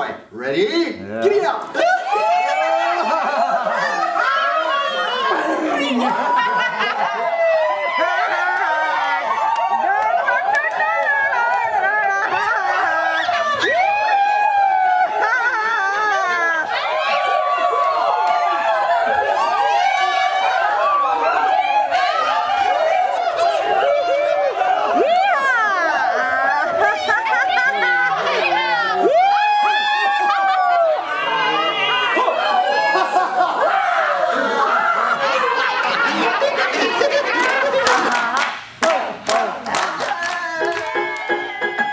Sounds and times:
Laughter: 2.8s - 4.5s, 5.2s - 7.5s, 11.8s - 13.6s, 15.0s - 16.7s, 26.3s - 28.5s, 32.2s - 38.5s.

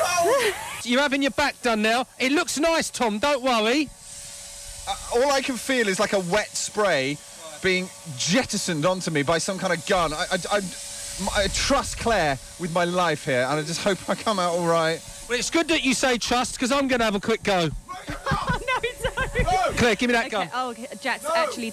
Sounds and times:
Spray: 0.0s - 21.7s
Speech: 4.9s - 21.7s.

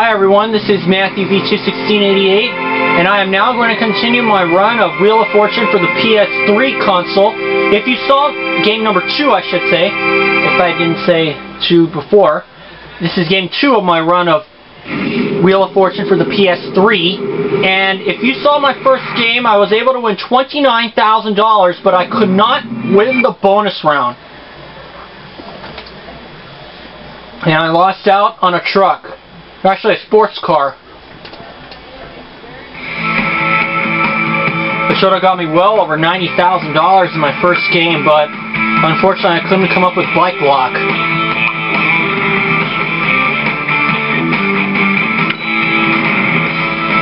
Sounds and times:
Speech: 0.0s - 14.5s, 15.4s - 24.2s, 27.4s - 30.8s, 34.9s - 40.9s
Music: 0.1s - 11.6s, 14.9s - 23.3s, 32.8s - 47.0s.

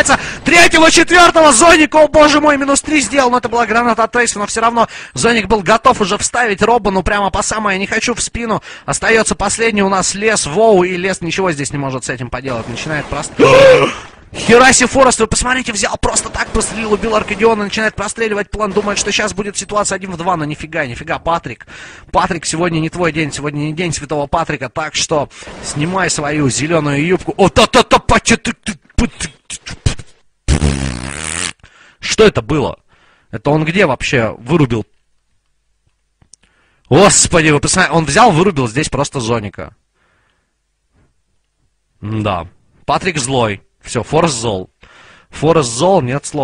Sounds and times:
Speech: 0.0s - 30.1s, 32.0s - 35.0s, 36.9s - 39.8s, 42.0s - 44.7s, 45.4s - 46.4s.

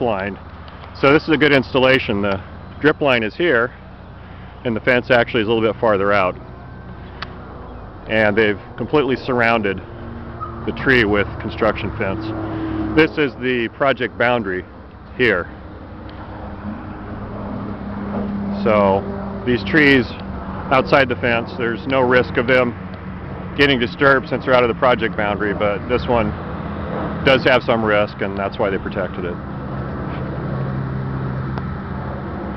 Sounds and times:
Speech: 0.0s - 0.4s, 1.0s - 3.8s, 4.6s - 6.4s, 8.1s - 9.8s, 10.7s - 12.4s, 13.0s - 15.5s, 18.6s - 22.8s, 23.6s - 26.4s, 27.3s - 29.4s
Outside, urban or manmade: 0.0s - 32.5s.

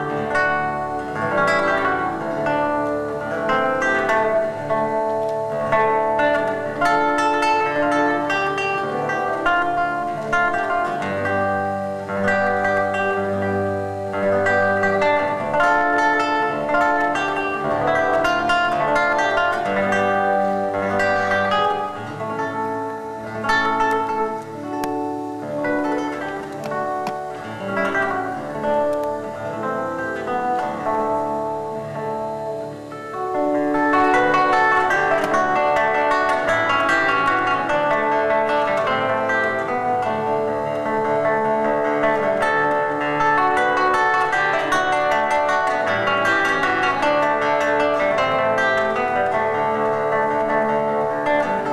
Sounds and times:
Guitar: 0.0s - 51.7s.

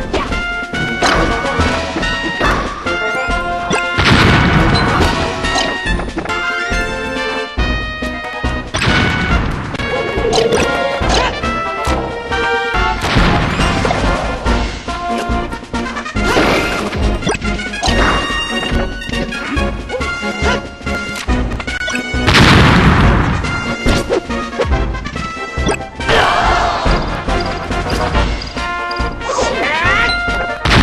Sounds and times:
Music: 0.0s - 30.8s.

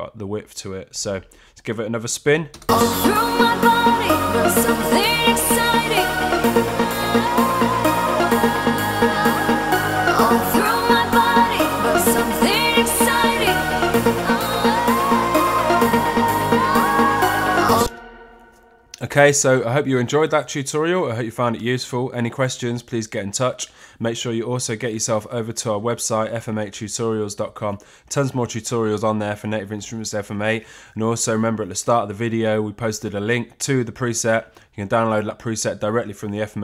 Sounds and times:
Speech: 0.0s - 2.6s, 19.0s - 36.6s
Synthesizer: 2.6s - 19.0s.

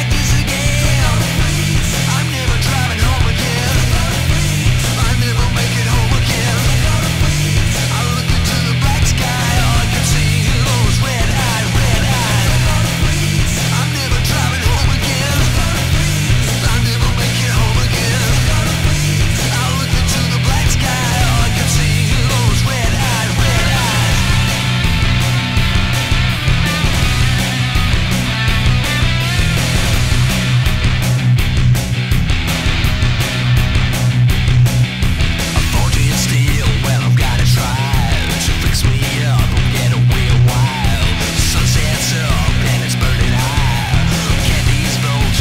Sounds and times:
Music: 0.0s - 45.4s.

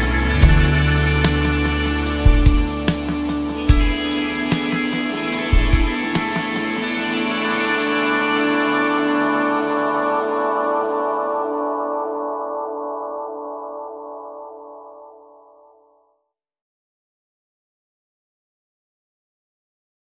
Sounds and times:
Music: 0.0s - 16.4s.

